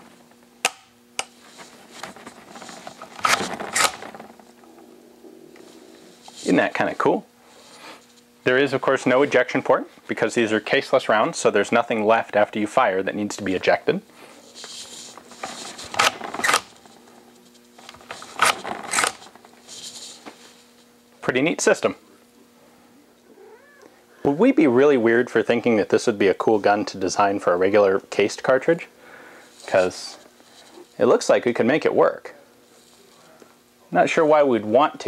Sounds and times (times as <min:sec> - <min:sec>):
Inside, small room: 0:00.0 - 0:35.0
Speech: 0:06.4 - 0:07.3, 0:08.4 - 0:14.1, 0:21.2 - 0:22.2, 0:24.2 - 0:28.9, 0:29.7 - 0:30.3, 0:31.0 - 0:32.5, 0:33.1 - 0:35.0.